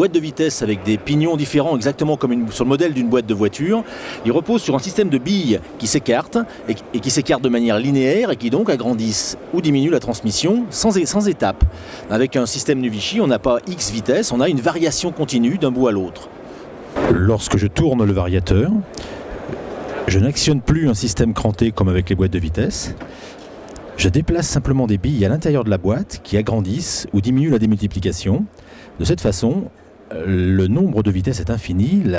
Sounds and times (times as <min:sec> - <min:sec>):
Speech: 0:00.0 - 0:16.3, 0:17.0 - 0:18.9, 0:20.0 - 0:23.0, 0:24.0 - 0:32.1.